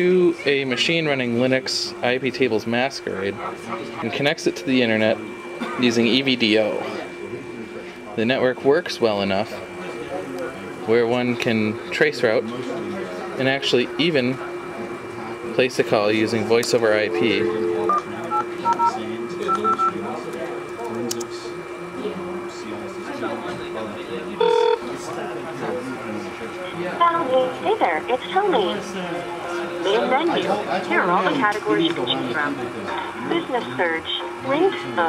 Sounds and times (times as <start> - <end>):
Speech: 0.0 - 35.0.